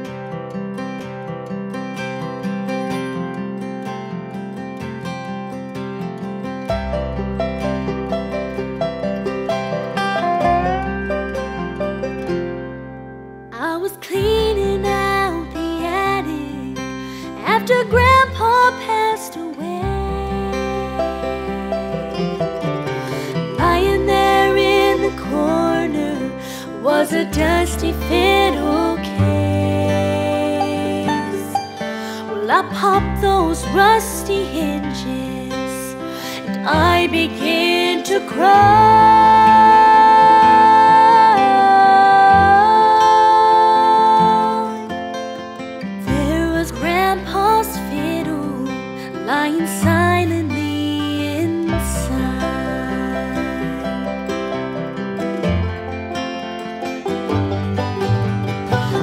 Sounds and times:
Musical instrument: 0:06.8 - 0:13.6, 0:17.6 - 0:45.5, 0:50.8 - 0:59.0.

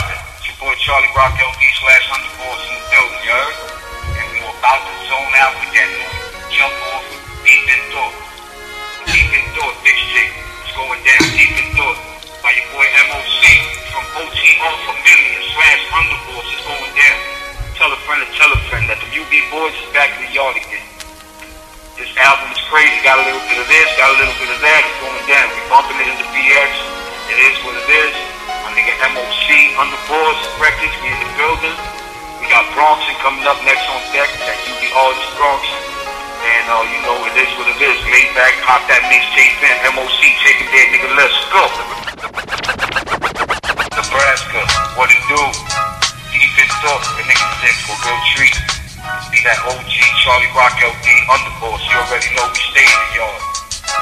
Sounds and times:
Speech: 0:00.0 - 0:08.2, 0:09.1 - 0:17.2, 0:17.8 - 0:20.9, 0:22.0 - 0:35.8, 0:36.4 - 0:42.3, 0:44.0 - 0:45.7, 0:46.3 - 0:53.5
Music: 0:00.0 - 0:54.0.

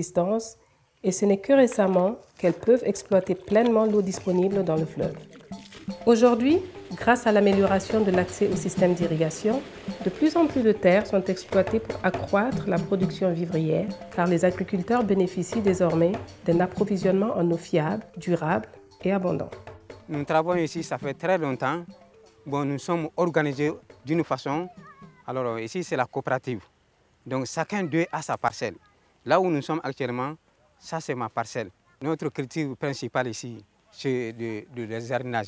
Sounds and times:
Music: 0:02.4 - 0:25.8.

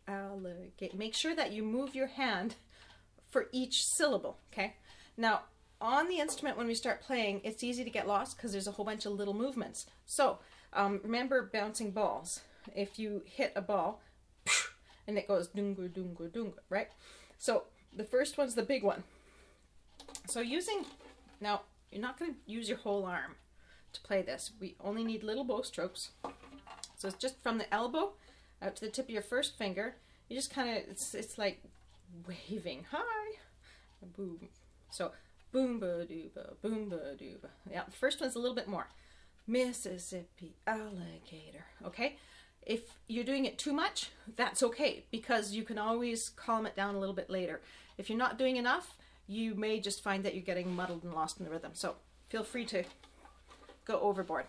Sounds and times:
Speech: 0:00.0 - 0:02.6, 0:03.2 - 0:14.0, 0:15.0 - 0:19.1, 0:20.3 - 0:26.2, 0:26.9 - 0:38.9, 0:39.5 - 0:52.9, 0:53.8 - 0:54.4.

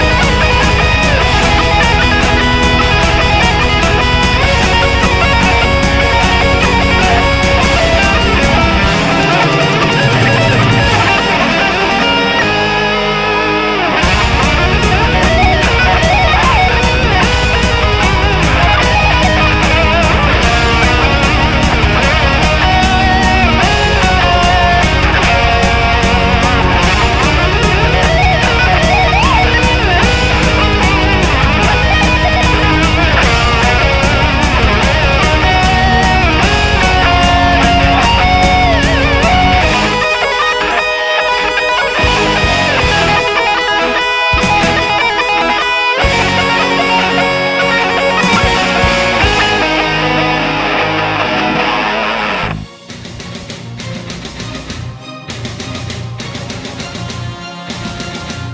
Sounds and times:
Electric guitar: 0:00.0 - 0:58.5
Strum: 0:00.0 - 0:58.5.

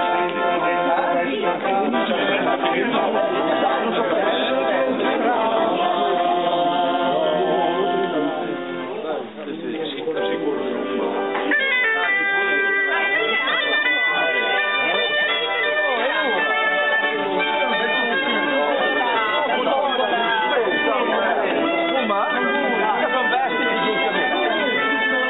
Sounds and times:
Bagpipes: 0:00.0 - 0:09.2, 0:10.1 - 0:25.2
Wind instrument, woodwind instrument: 0:00.0 - 0:09.4, 0:10.0 - 0:25.2.

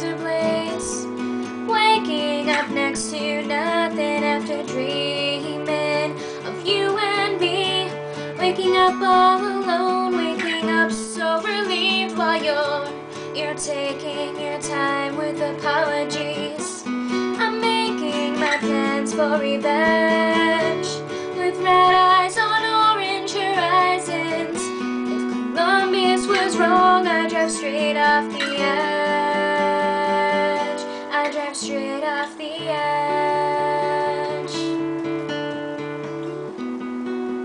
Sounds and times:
Music: 0:00.0 - 0:37.4.

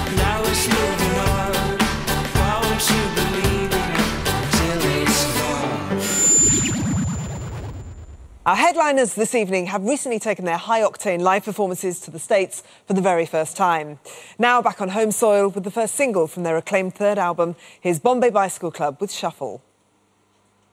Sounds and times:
Music: 0:00.0 - 0:06.6
Speech: 0:08.5 - 0:19.7.

